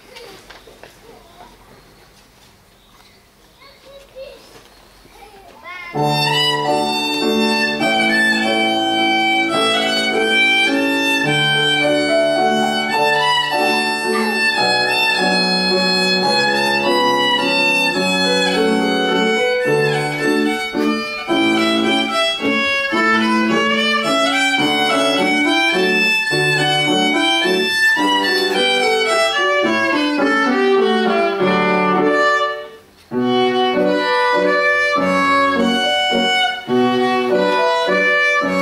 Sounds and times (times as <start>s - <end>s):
Violin, fiddle: 6.0s - 38.6s.